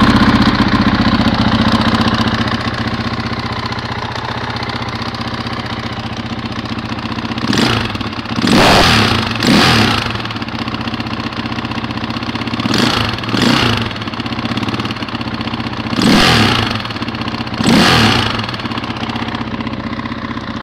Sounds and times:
Heavy engine (low frequency): 0.0s - 20.6s
Vehicle: 0.0s - 20.6s
Accelerating, revving, vroom: 7.5s - 10.1s, 12.7s - 13.9s, 16.0s - 16.8s, 17.6s - 18.4s.

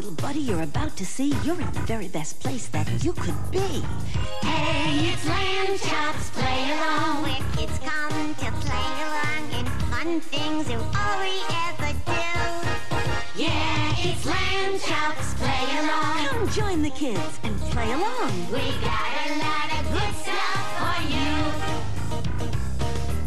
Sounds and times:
Speech: 0.0s - 4.0s, 16.2s - 18.6s
Music: 0.0s - 23.2s.

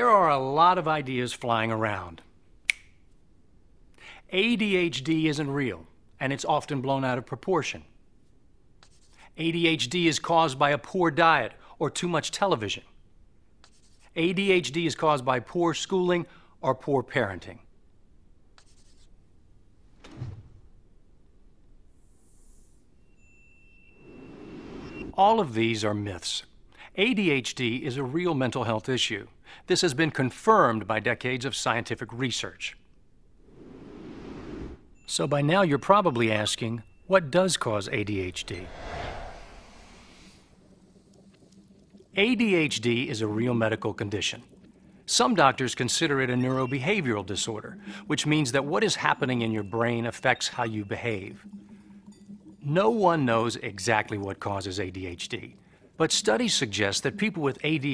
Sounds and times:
Speech: 0.0s - 2.3s, 4.3s - 7.9s, 9.4s - 12.9s, 14.1s - 17.7s, 25.2s - 32.8s, 35.1s - 38.7s, 42.2s - 44.5s, 45.1s - 51.4s, 52.6s - 57.9s.

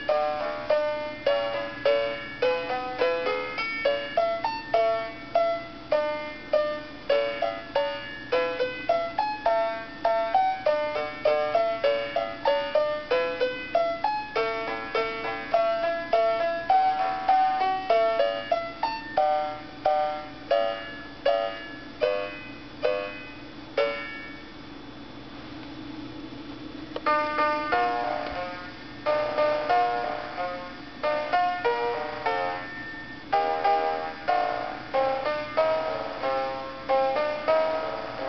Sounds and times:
Music for children: 0.0s - 24.5s, 27.0s - 38.2s.

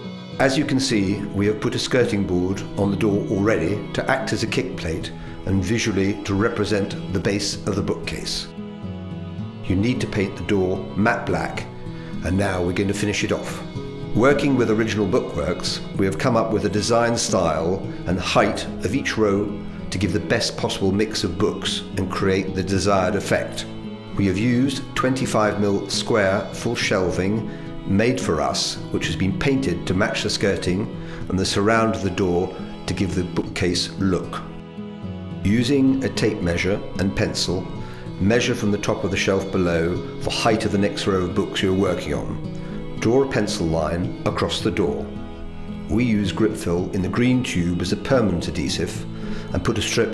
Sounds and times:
Music: 0.0s - 50.1s
Speech: 0.4s - 8.5s, 9.7s - 34.5s, 35.4s - 42.4s, 43.0s - 45.1s, 45.9s - 50.1s.

